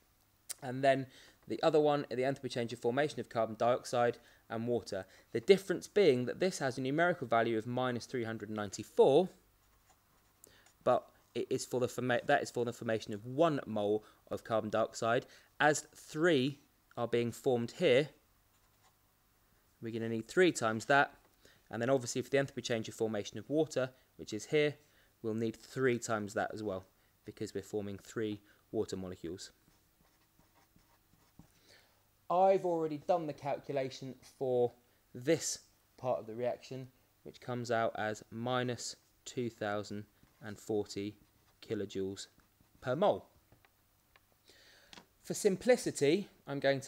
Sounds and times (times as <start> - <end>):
Inside, small room: 0.0 - 46.8
Speech: 0.5 - 9.4, 10.8 - 18.2, 19.8 - 29.6, 32.3 - 43.3, 45.2 - 46.8
Writing: 9.6 - 10.8, 18.5 - 19.0, 29.6 - 31.6.